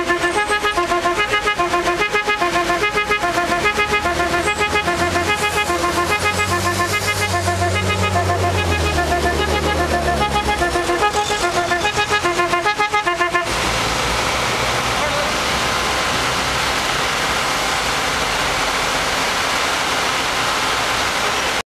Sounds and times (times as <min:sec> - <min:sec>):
Car: 0:00.0 - 0:21.6.